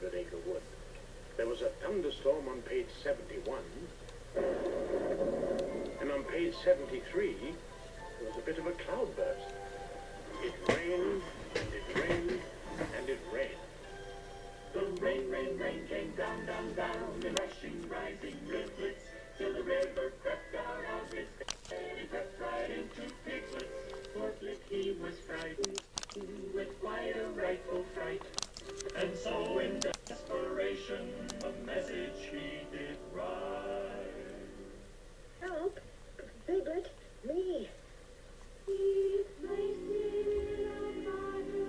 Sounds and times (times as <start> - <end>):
Music: 5.4 - 35.0, 38.7 - 41.6.